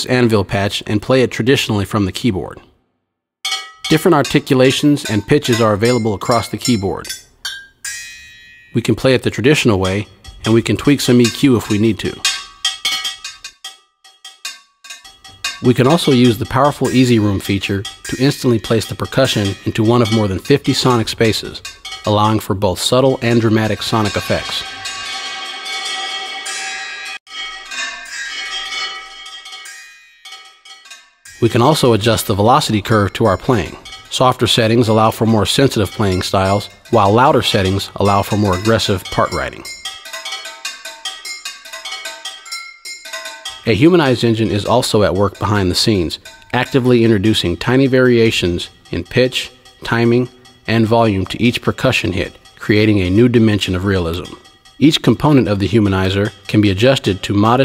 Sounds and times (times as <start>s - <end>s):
Speech: 0.0s - 2.7s, 3.9s - 7.1s, 8.8s - 12.3s, 15.6s - 24.7s, 31.4s - 39.7s, 43.6s - 57.6s
Percussion: 3.4s - 57.6s.